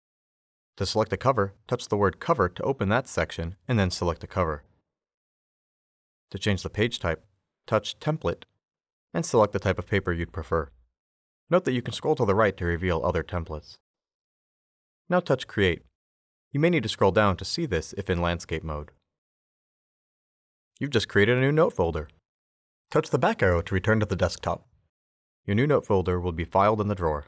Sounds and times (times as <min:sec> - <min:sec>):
Speech: 0:00.8 - 0:04.7, 0:06.3 - 0:08.5, 0:09.2 - 0:10.8, 0:11.5 - 0:13.8, 0:15.1 - 0:15.9, 0:16.6 - 0:19.0, 0:20.8 - 0:22.2, 0:22.9 - 0:24.7, 0:25.5 - 0:27.2.